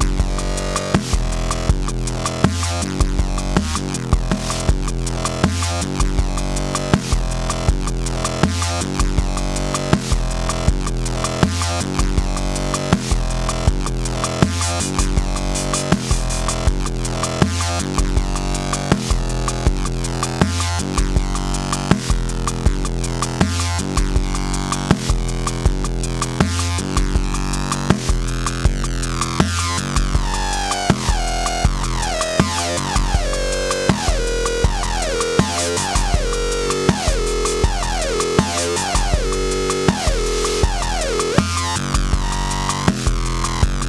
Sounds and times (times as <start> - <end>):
Dubstep: 0.0 - 43.8.